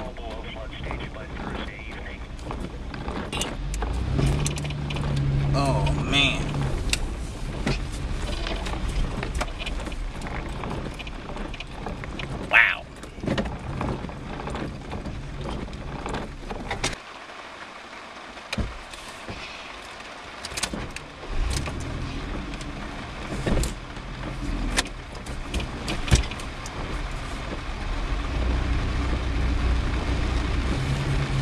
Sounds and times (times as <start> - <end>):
Rain: 0.0 - 31.4
Vehicle: 0.0 - 31.4.